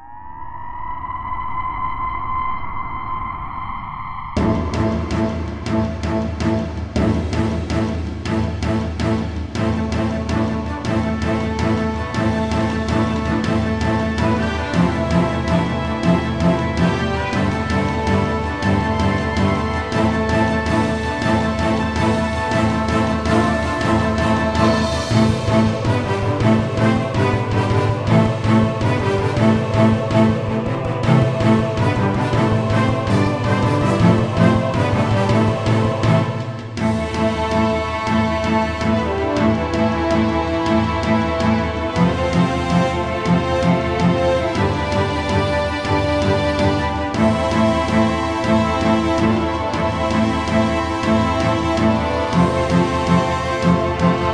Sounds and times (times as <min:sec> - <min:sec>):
Soundtrack music: 0:00.0 - 0:54.3.